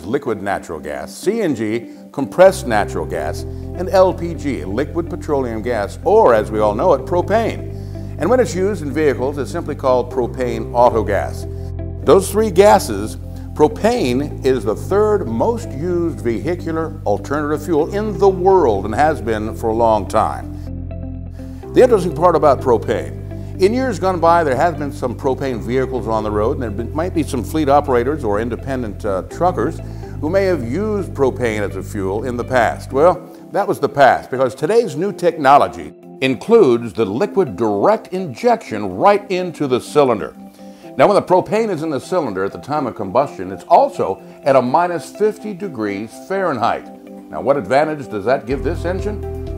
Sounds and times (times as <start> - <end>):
Speech: 0.0 - 7.6, 8.2 - 11.4, 12.1 - 20.4, 21.8 - 40.4, 41.0 - 49.2
Music: 0.0 - 49.5.